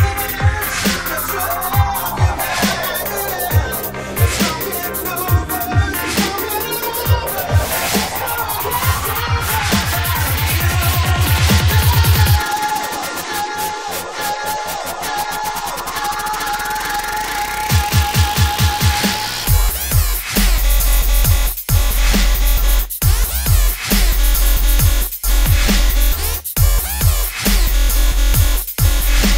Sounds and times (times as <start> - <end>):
Dubstep: 0.0 - 29.3.